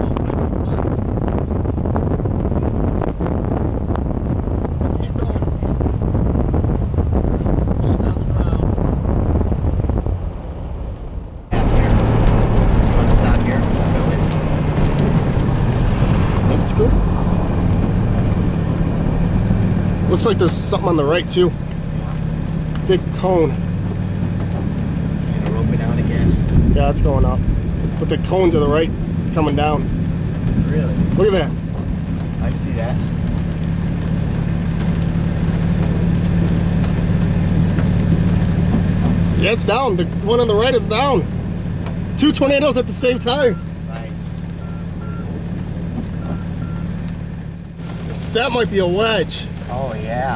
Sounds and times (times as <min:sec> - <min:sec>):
Vehicle: 0:00.0 - 0:50.3
Speech: 0:04.8 - 0:05.8, 0:07.8 - 0:08.6, 0:13.0 - 0:14.3, 0:20.1 - 0:22.2, 0:22.8 - 0:23.6, 0:25.3 - 0:27.4, 0:28.0 - 0:29.9, 0:32.4 - 0:33.1, 0:39.4 - 0:41.3, 0:42.2 - 0:44.4, 0:48.3 - 0:50.3.